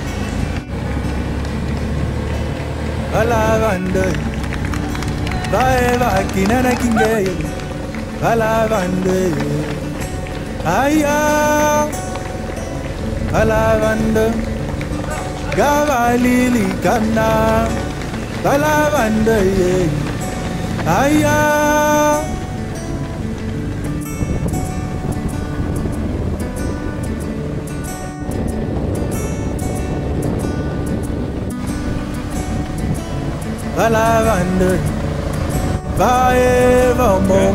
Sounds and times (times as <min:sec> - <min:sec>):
Music: 0:00.0 - 0:37.5
Outside, rural or natural: 0:00.0 - 0:37.5
Run: 0:00.0 - 0:37.5.